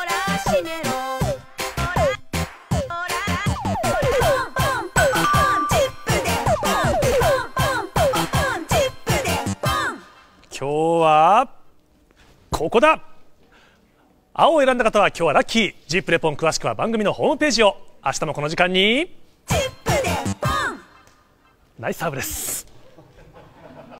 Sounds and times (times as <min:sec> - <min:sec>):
Music: 0:00.0 - 0:10.5, 0:19.4 - 0:21.4
Speech: 0:21.8 - 0:22.6.